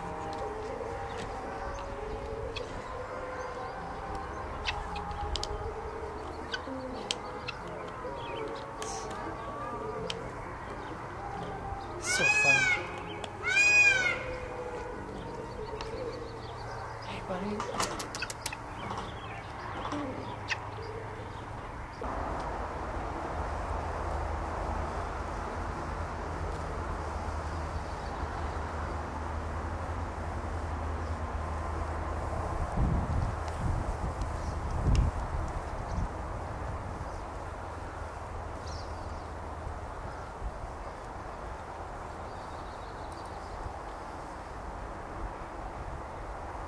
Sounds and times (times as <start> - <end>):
Music: 0.0 - 17.6
Speech: 12.0 - 13.0, 17.0 - 17.8.